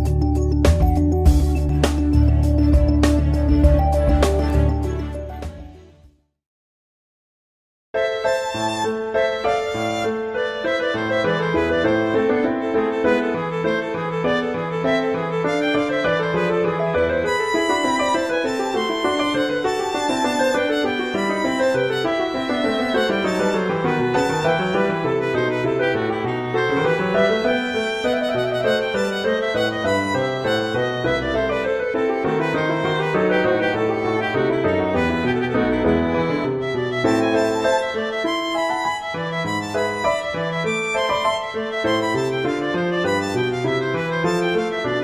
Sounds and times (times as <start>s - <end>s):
Musical instrument: 0.0s - 5.9s, 8.0s - 45.0s.